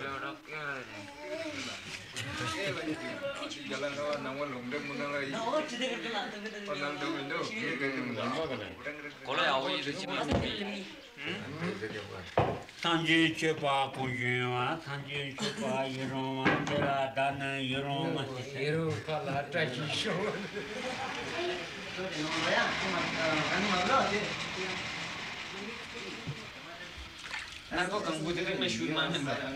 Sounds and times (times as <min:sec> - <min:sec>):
Laughter: 0:15.4 - 0:15.8.